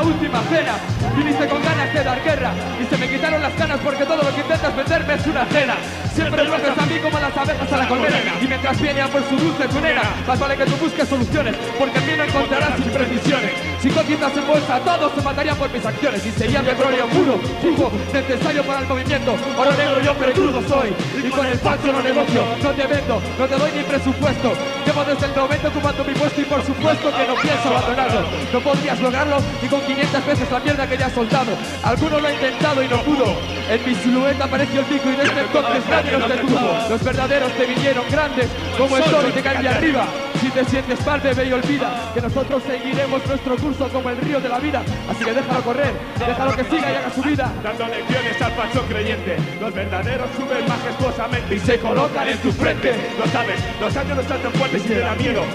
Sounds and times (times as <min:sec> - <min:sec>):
Music: 0:00.0 - 0:55.5.